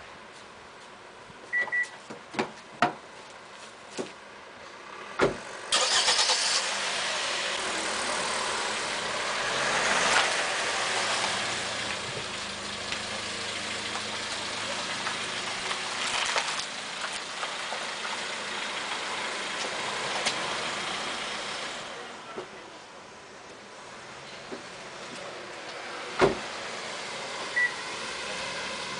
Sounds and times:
Car: 0:00.0 - 0:28.9.

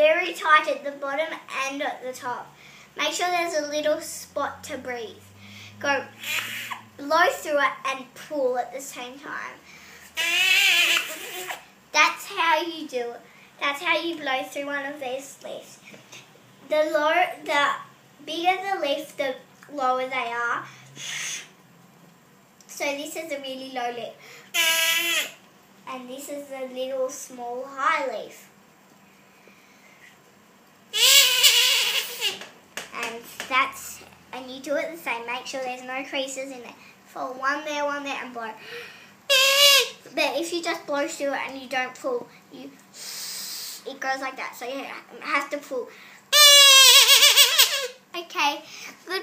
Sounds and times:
Child speech, kid speaking: 0:00.0 - 0:06.2, 0:07.0 - 0:09.6, 0:11.9 - 0:15.8, 0:16.6 - 0:20.7, 0:22.7 - 0:24.2, 0:25.9 - 0:28.6, 0:32.9 - 0:38.6, 0:40.0 - 0:42.8, 0:43.8 - 0:46.0, 0:47.3 - 0:49.2.

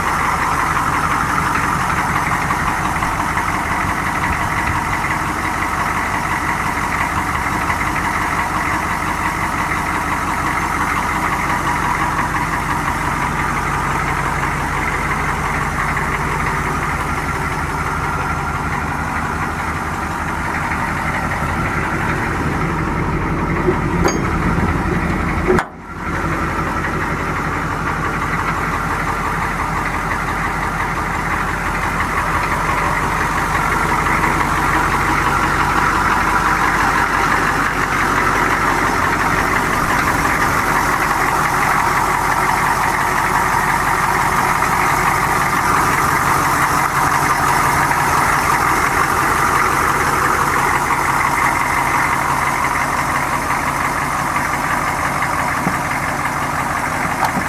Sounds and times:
Truck: 0:00.0 - 0:57.4.

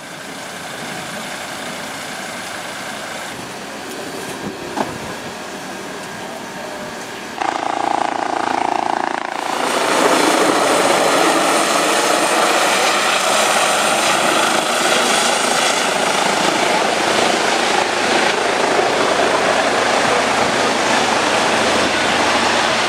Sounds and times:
Vehicle: 0:00.0 - 0:22.8.

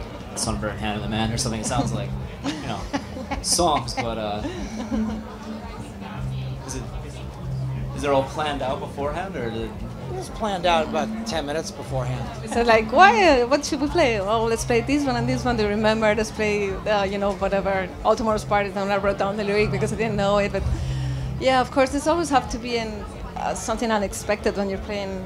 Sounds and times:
Music: 0:00.0 - 0:25.2.

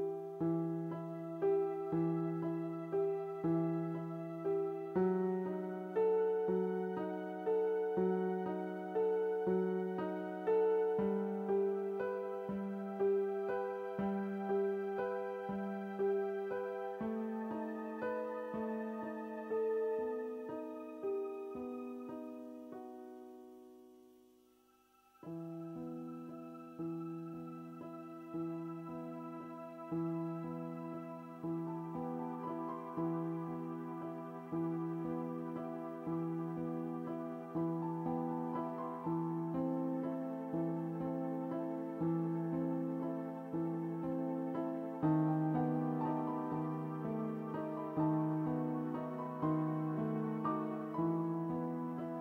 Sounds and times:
Lullaby: 0:00.0 - 0:52.2.

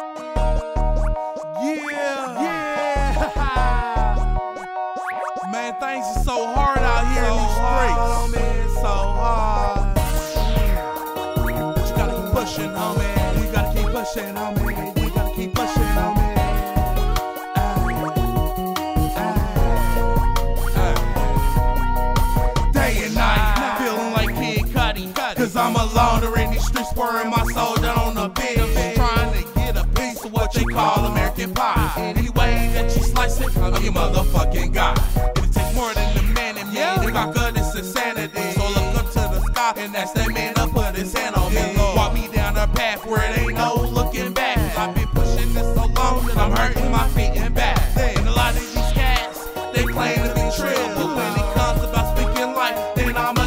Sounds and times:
Soundtrack music: 0:00.0 - 0:53.4.

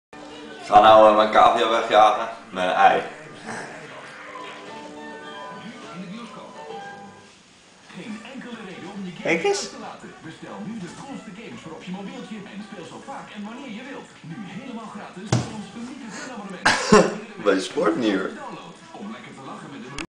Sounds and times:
Speech: 0:07.9 - 0:20.0.

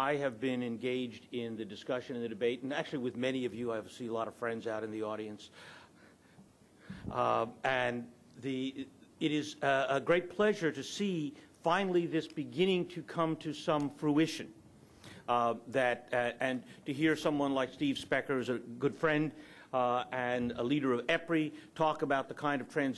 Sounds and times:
Male speech, man speaking: 0:00.0 - 0:05.5, 0:07.1 - 0:14.5, 0:15.3 - 0:22.9.

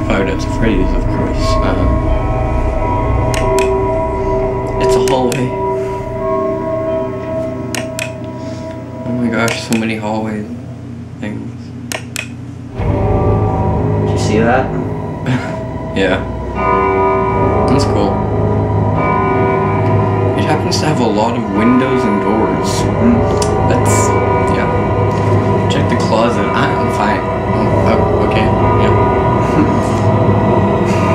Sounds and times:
Speech: 0:00.0 - 0:02.0, 0:04.8 - 0:05.6, 0:09.1 - 0:10.6, 0:11.2 - 0:11.7, 0:14.1 - 0:14.9, 0:16.0 - 0:16.3, 0:17.7 - 0:18.2, 0:20.4 - 0:24.8, 0:25.7 - 0:30.1
Inside, small room: 0:00.0 - 0:31.1
Music: 0:00.0 - 0:31.1.

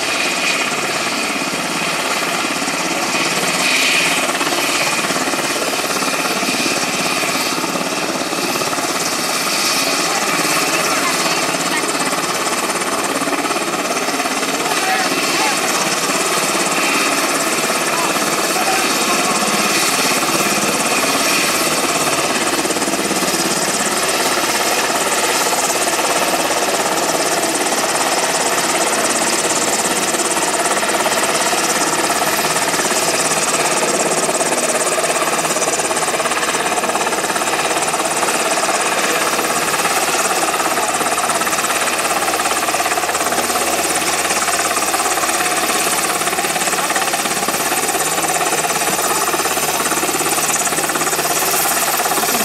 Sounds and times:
Helicopter: 0:00.0 - 0:52.4
Speech: 0:09.9 - 0:12.2, 0:14.2 - 0:16.0, 0:17.8 - 0:19.9.

